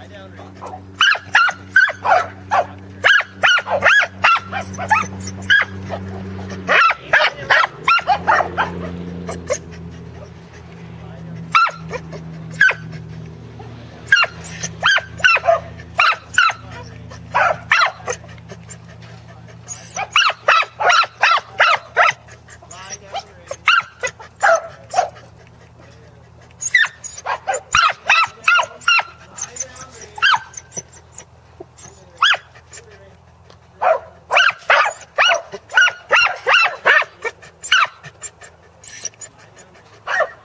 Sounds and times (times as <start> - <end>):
Bow-wow: 0.6 - 9.6, 11.5 - 12.9, 14.1 - 18.2, 19.7 - 22.2, 23.2 - 25.2, 26.6 - 29.1, 33.8 - 38.1, 40.1 - 40.4.